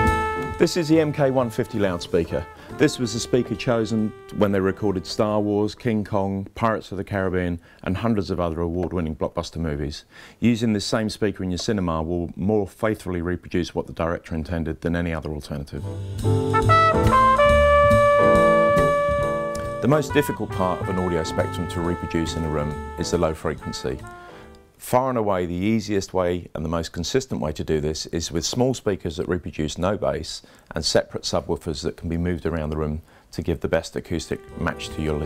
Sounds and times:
Music: 0:00.0 - 0:05.8, 0:15.8 - 0:24.8, 0:34.1 - 0:35.2
Speech: 0:00.6 - 0:15.9, 0:19.8 - 0:24.1, 0:24.8 - 0:35.2.

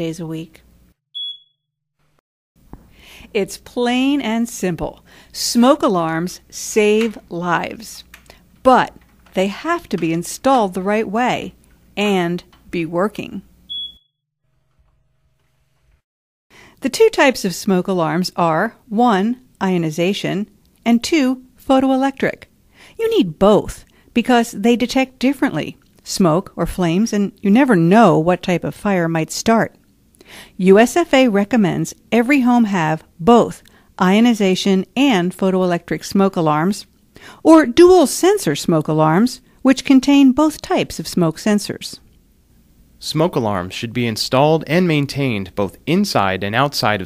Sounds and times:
Speech: 0:00.0 - 0:00.6, 0:03.3 - 0:13.5, 0:16.8 - 0:29.8, 0:30.6 - 0:42.0, 0:43.0 - 0:47.0.

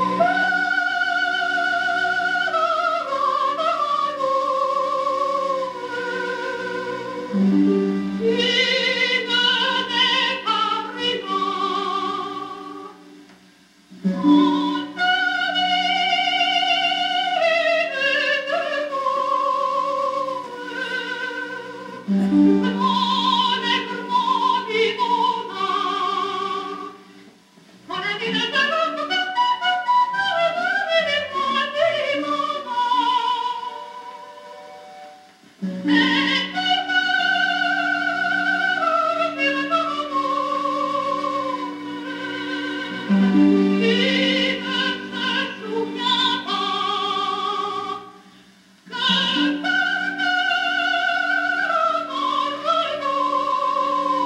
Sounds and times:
Music: 0:00.0 - 0:54.2.

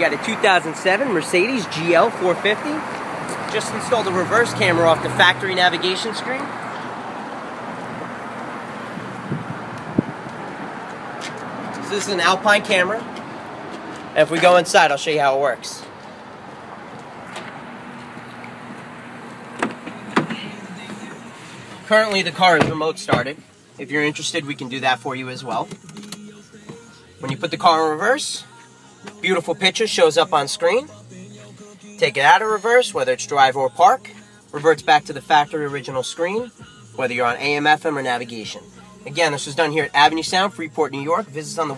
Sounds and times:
Speech: 0:00.0 - 0:02.8, 0:03.5 - 0:06.5, 0:11.8 - 0:13.1, 0:14.2 - 0:15.9, 0:21.9 - 0:25.7, 0:27.2 - 0:28.4, 0:29.2 - 0:30.9, 0:32.0 - 0:41.7
Music: 0:19.9 - 0:41.7.

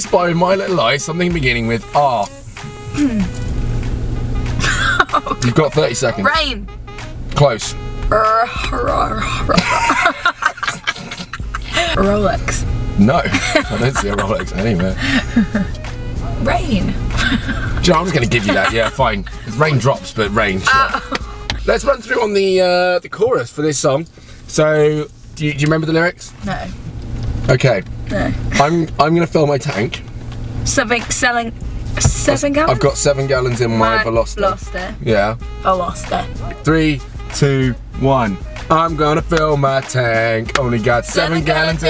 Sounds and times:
Music: 0:00.0 - 0:23.2, 0:26.5 - 0:41.9
Speech: 0:11.7 - 0:15.0, 0:17.8 - 0:21.0, 0:30.7 - 0:41.9.

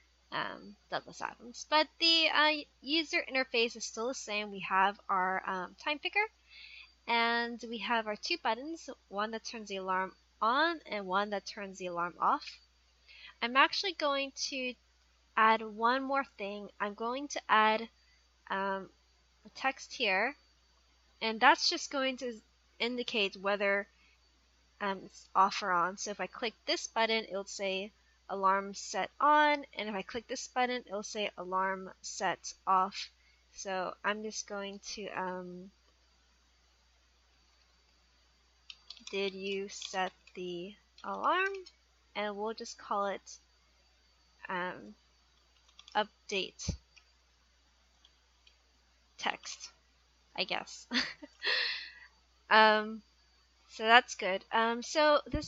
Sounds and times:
Speech: 0:00.4 - 0:06.3, 0:07.1 - 0:12.6, 0:13.4 - 0:14.8, 0:15.4 - 0:17.9, 0:18.5 - 0:18.9, 0:19.5 - 0:20.4, 0:21.2 - 0:23.8, 0:24.8 - 0:35.7, 0:39.1 - 0:43.4, 0:44.4 - 0:45.0, 0:46.0 - 0:46.8, 0:49.2 - 0:49.7, 0:50.4 - 0:51.2, 0:52.5 - 0:53.0, 0:53.8 - 0:55.4.

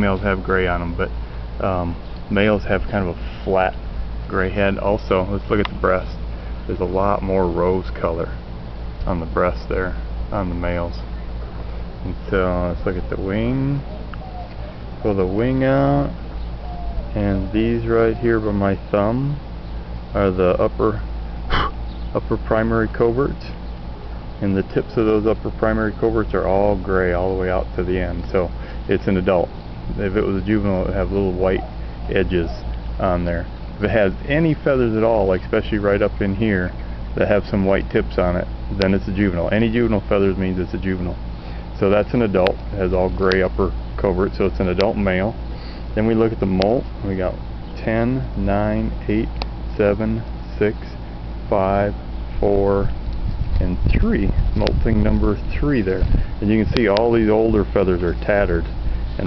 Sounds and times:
Speech: 0:00.0 - 0:08.4, 0:09.0 - 0:11.1, 0:12.0 - 0:13.9, 0:15.0 - 0:16.2, 0:17.1 - 0:19.4, 0:20.2 - 0:23.6, 0:24.4 - 0:41.2, 0:41.8 - 0:45.4, 0:46.0 - 0:52.9, 0:53.6 - 0:59.2
Bird: 0:13.0 - 0:15.4, 0:16.0 - 0:18.6, 0:21.4 - 0:22.2, 0:30.8 - 0:32.9.

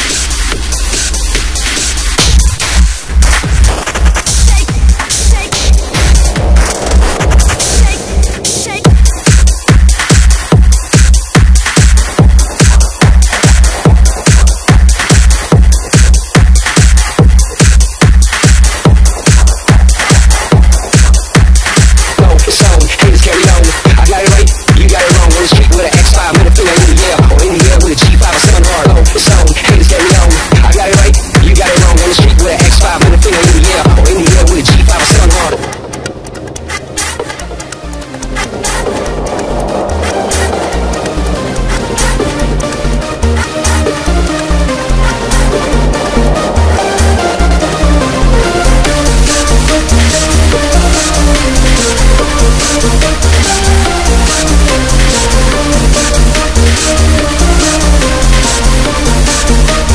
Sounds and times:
Techno: 0:00.0 - 0:59.9.

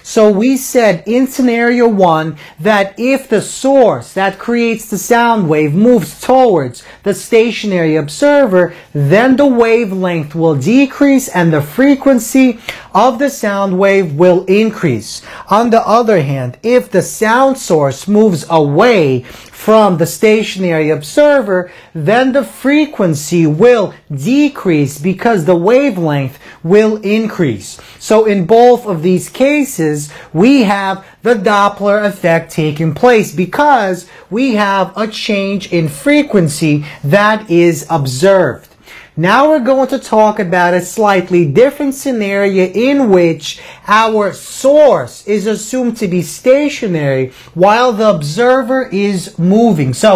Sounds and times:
Speech: 0:00.0 - 0:50.1.

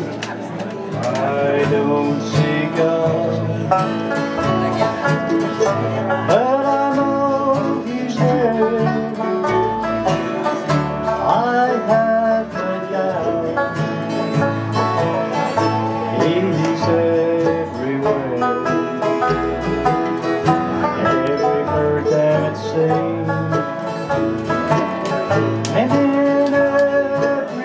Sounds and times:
Country: 0:00.0 - 0:27.6
Wedding music: 0:00.8 - 0:27.6.

